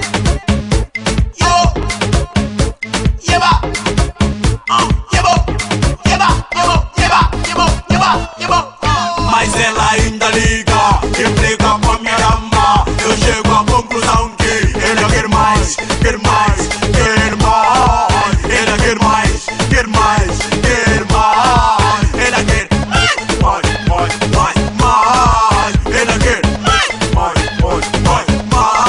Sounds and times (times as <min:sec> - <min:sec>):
Music of Africa: 0:00.0 - 0:28.8.